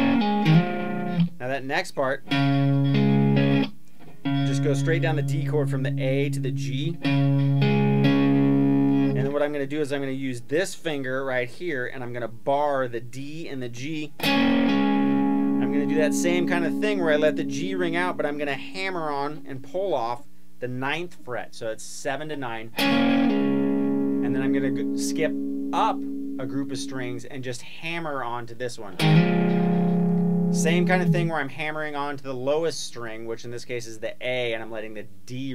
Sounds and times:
Electric guitar: 0.0s - 1.4s, 2.3s - 9.3s, 14.2s - 18.4s, 22.7s - 27.2s, 29.0s - 31.3s
Speech: 1.4s - 2.3s, 4.5s - 7.0s, 9.2s - 14.2s, 15.6s - 22.8s, 24.2s - 29.0s, 30.6s - 35.5s.

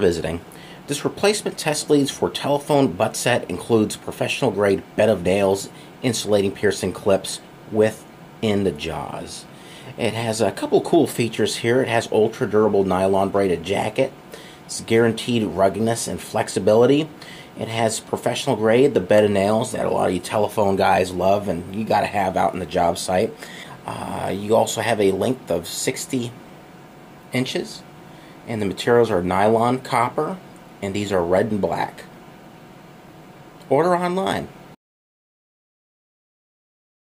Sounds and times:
Speech: 0.0s - 26.4s, 27.3s - 27.9s, 28.5s - 32.1s, 33.6s - 34.6s.

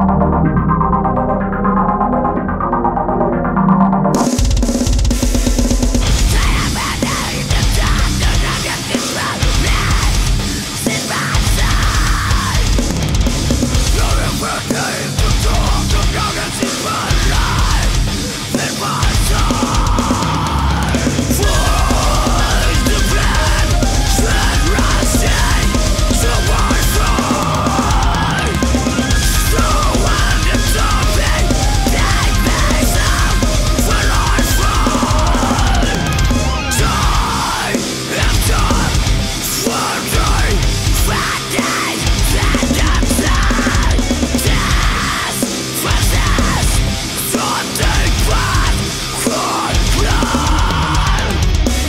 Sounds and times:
Music: 0.0s - 51.8s.

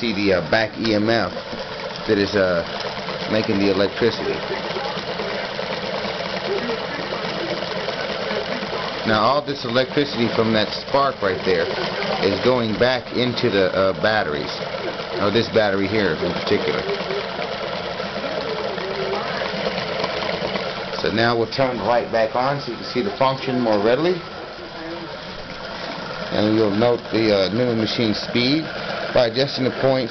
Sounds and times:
Trickle, dribble: 0.0s - 30.1s.

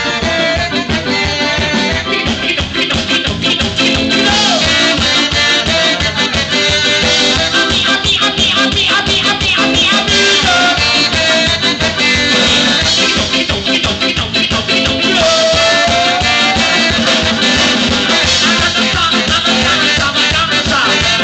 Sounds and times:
Drum kit: 0.0s - 21.2s
Singing: 0.0s - 21.2s
Ska: 0.0s - 21.2s.

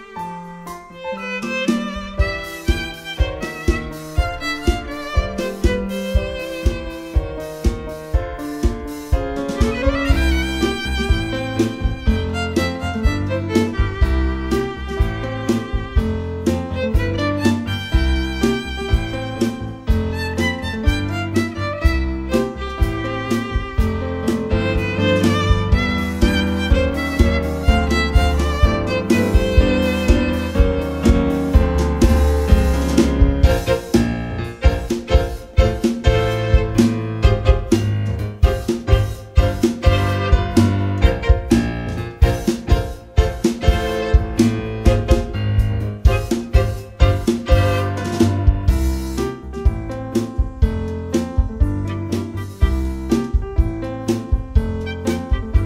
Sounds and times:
Violin, fiddle: 0.0s - 7.7s, 9.6s - 32.1s, 39.4s - 42.0s.

